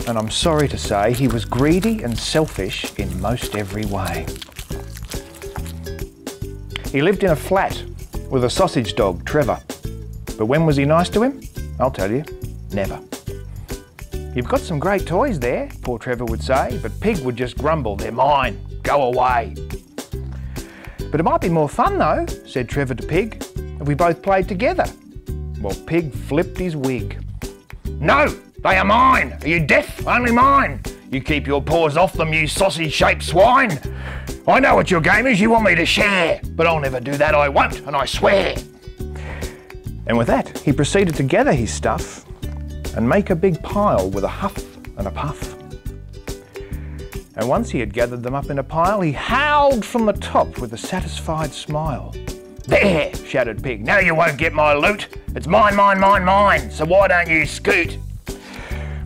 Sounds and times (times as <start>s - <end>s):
Speech: 0.0s - 4.3s, 6.9s - 9.6s, 10.4s - 13.0s, 14.4s - 19.5s, 21.1s - 25.0s, 25.6s - 27.2s, 28.0s - 33.8s, 34.5s - 38.6s, 40.1s - 42.2s, 42.9s - 45.6s, 47.4s - 58.0s
Music: 0.0s - 59.0s.